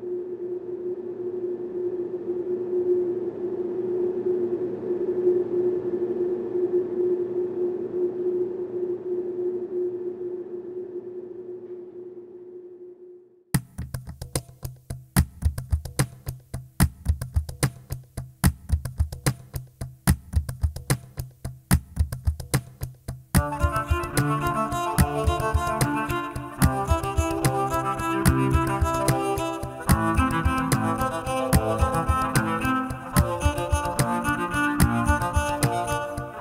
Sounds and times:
Music: 13.6s - 36.4s.

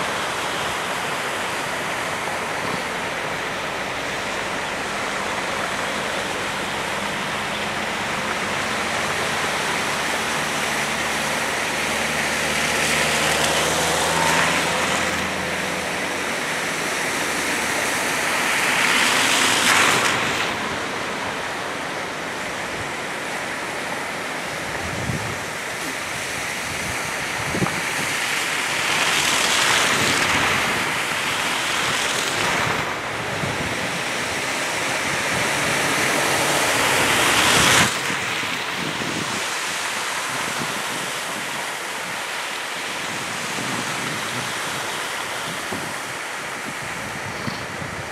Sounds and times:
Car: 0.0s - 48.1s.

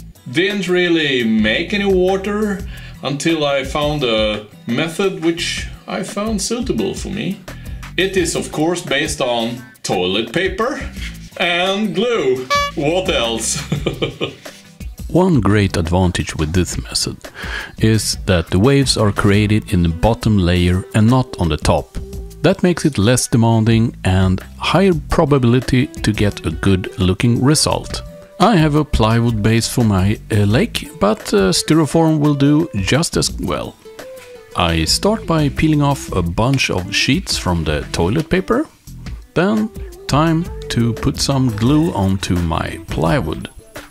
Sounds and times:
Music: 0.0s - 43.9s
Speech: 0.3s - 7.4s, 8.0s - 13.8s, 15.0s - 17.2s, 17.8s - 33.8s, 34.6s - 38.7s, 39.4s - 43.5s.

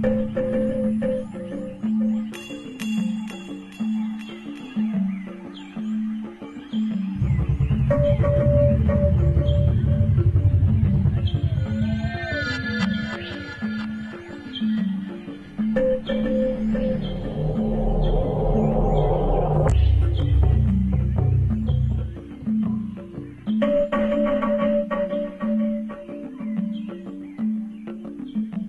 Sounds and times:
Music: 0.0s - 28.6s.

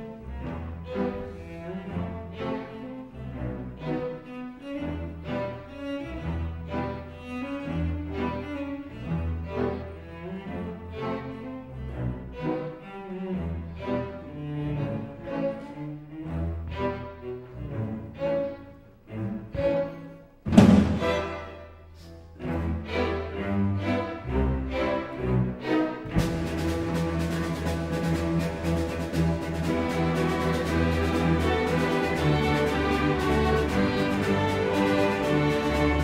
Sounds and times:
Orchestra: 0.0s - 36.0s
Violin, fiddle: 0.0s - 36.0s.

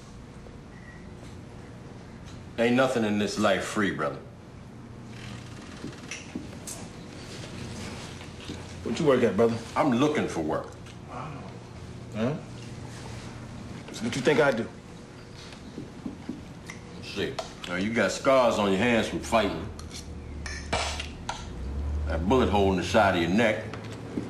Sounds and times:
Speech: 8.8s - 11.4s, 17.0s - 19.7s, 22.1s - 23.7s.

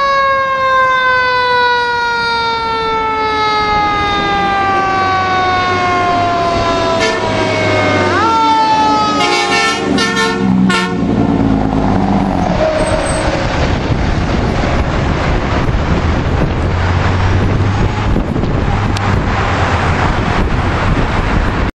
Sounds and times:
Heavy engine (low frequency): 0.0s - 21.7s
Truck: 0.0s - 21.7s.

